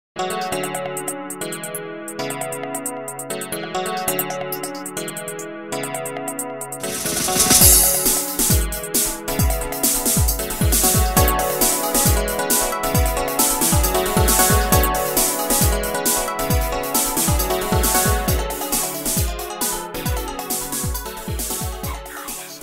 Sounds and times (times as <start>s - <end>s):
Synthesizer: 0.2s - 22.6s.